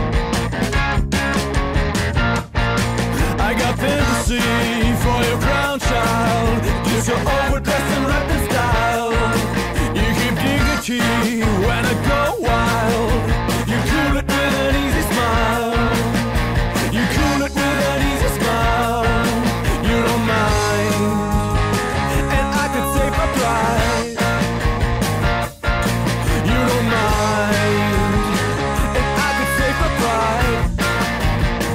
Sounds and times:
Music: 0.0 - 31.7.

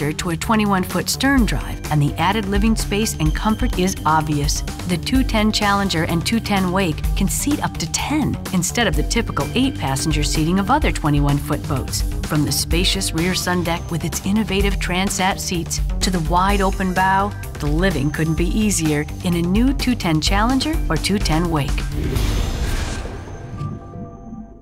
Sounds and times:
Speech: 0.0 - 21.8
Music: 0.0 - 24.6.

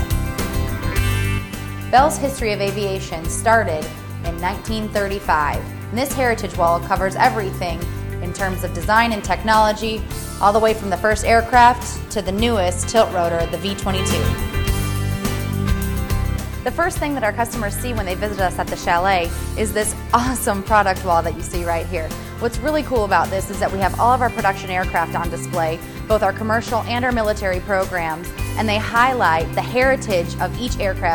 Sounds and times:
Music: 0.0 - 31.1
Speech: 1.9 - 14.4, 16.7 - 31.1.

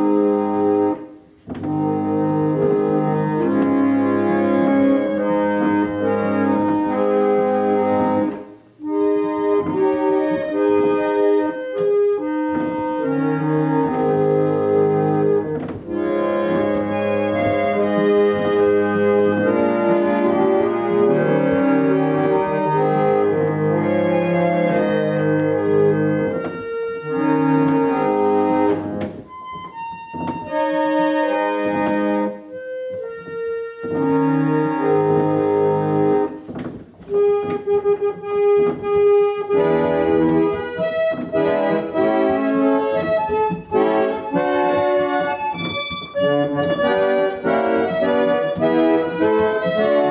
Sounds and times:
Hammond organ: 0.0 - 50.1.

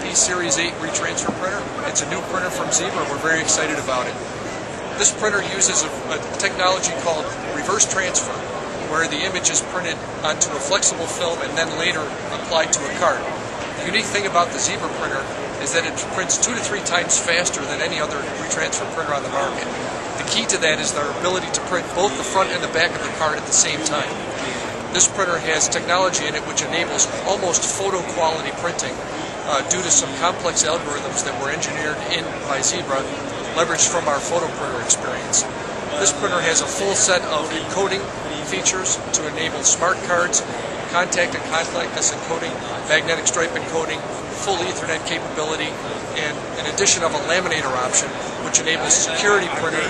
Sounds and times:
Speech: 0.0 - 49.8.

